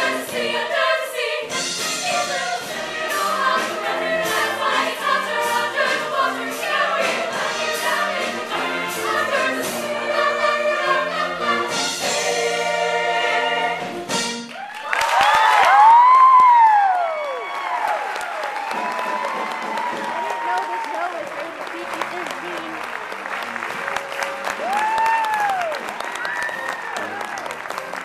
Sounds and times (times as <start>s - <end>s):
Music: 0.0s - 17.6s, 18.3s - 28.0s
Applause: 14.5s - 28.0s
Speech: 20.4s - 23.2s.